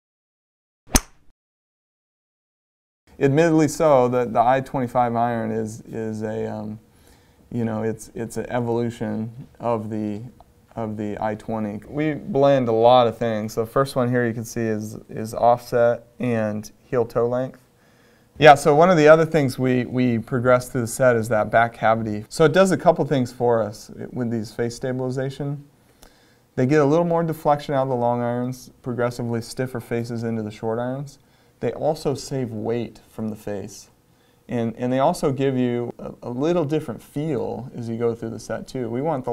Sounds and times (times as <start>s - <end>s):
Speech: 3.2s - 6.8s, 7.5s - 17.7s, 18.4s - 25.7s, 26.6s - 39.3s.